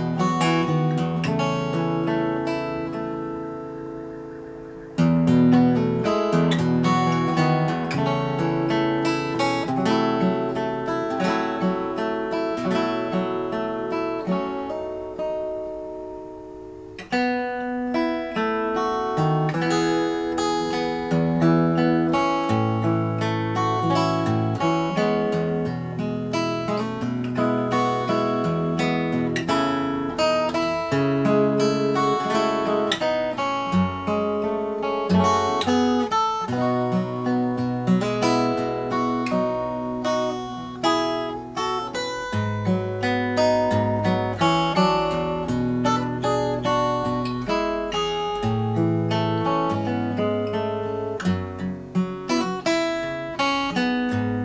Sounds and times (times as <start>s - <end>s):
Acoustic guitar: 0.0s - 54.4s.